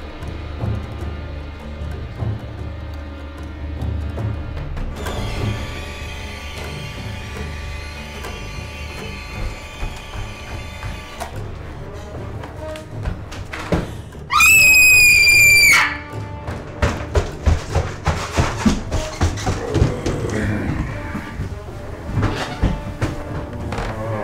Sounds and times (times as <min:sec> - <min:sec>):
Music: 0:00.0 - 0:24.2
Run: 0:09.3 - 0:24.1.